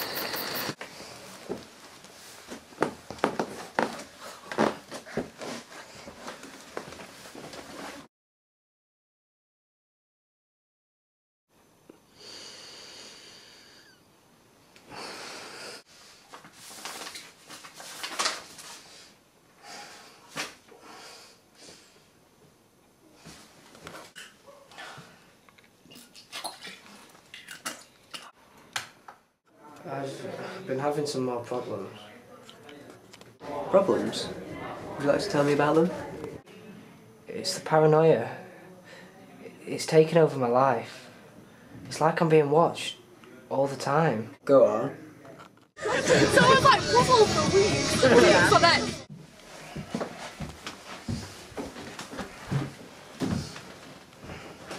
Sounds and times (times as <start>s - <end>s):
Speech: 41.9s - 49.0s.